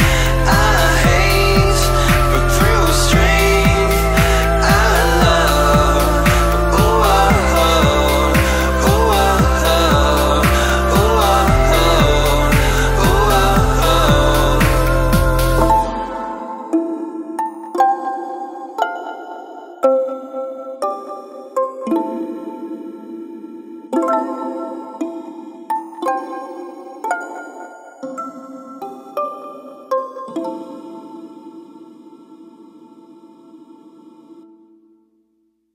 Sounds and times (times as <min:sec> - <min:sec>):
Music: 0:00.0 - 0:35.6.